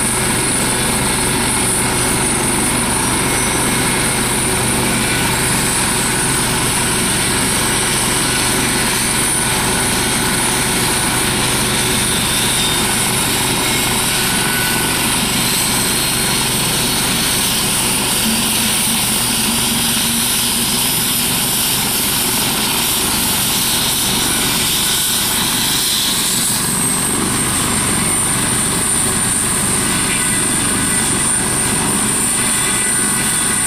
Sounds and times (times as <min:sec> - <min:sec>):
Aircraft engine: 0:00.0 - 0:33.6
Helicopter: 0:00.0 - 0:33.6.